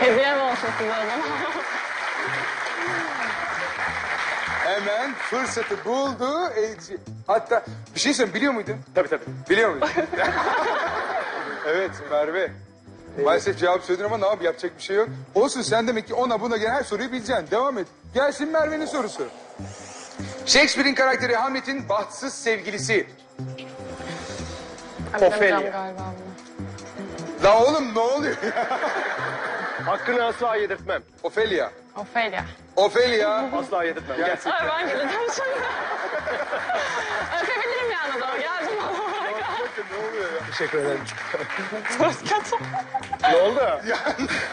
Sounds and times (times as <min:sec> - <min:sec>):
Music: 0:00.0 - 0:44.5.